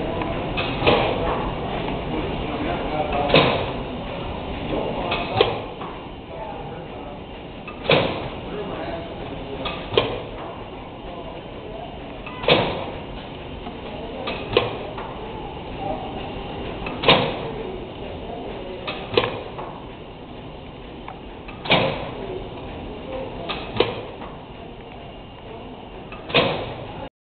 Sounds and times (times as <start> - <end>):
Engine: 0.0 - 27.1.